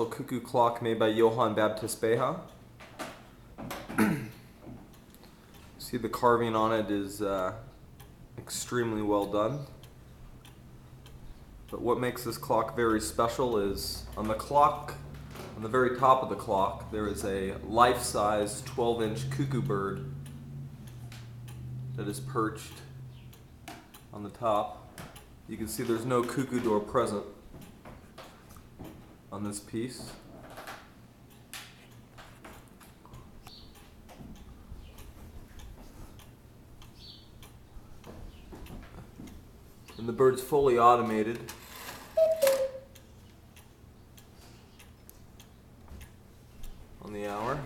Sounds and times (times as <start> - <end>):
Speech: 0.0 - 2.5, 5.8 - 7.7, 8.4 - 9.8, 11.7 - 15.0, 15.6 - 20.1, 22.0 - 22.9, 24.1 - 24.9, 25.5 - 27.4, 29.3 - 30.3, 40.0 - 41.5, 47.0 - 47.6.